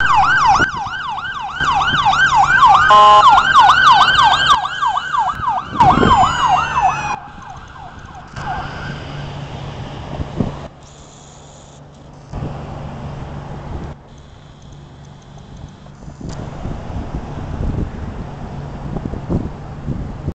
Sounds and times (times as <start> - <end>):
Vehicle: 0.0 - 20.3.